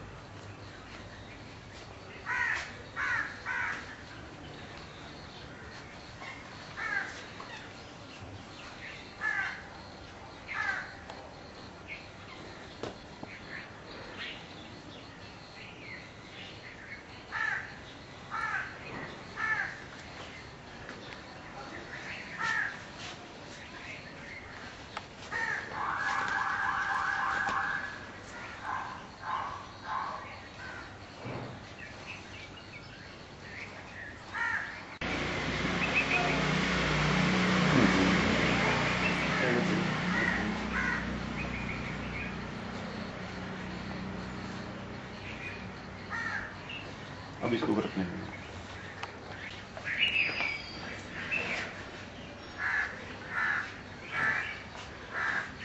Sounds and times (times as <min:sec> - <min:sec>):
Outside, urban or manmade: 0:00.0 - 0:55.6
Police car (siren): 0:26.0 - 0:28.0.